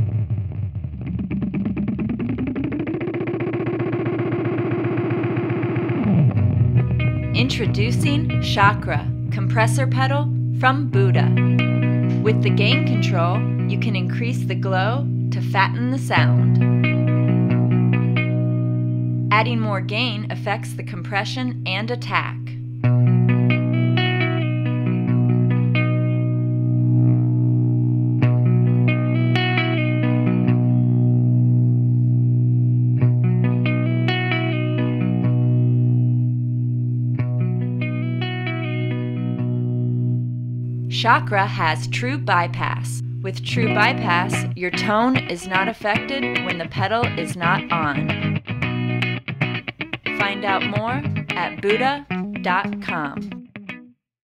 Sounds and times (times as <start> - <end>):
Strum: 0.0 - 53.5
Bass guitar: 0.0 - 54.0
Electric guitar: 0.0 - 54.0.